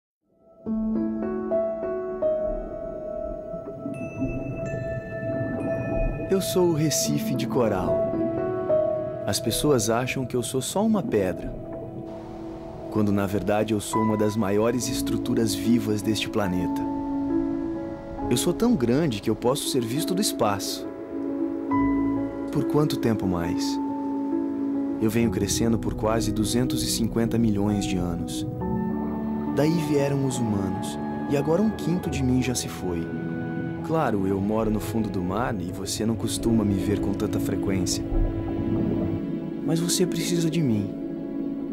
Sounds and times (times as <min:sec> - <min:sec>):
Music: 0:00.2 - 0:41.7
Speech: 0:06.3 - 0:08.0, 0:09.3 - 0:11.6, 0:12.9 - 0:16.9, 0:18.3 - 0:20.9, 0:22.5 - 0:23.8, 0:25.0 - 0:28.5, 0:29.6 - 0:33.1, 0:33.8 - 0:38.1, 0:39.6 - 0:41.0.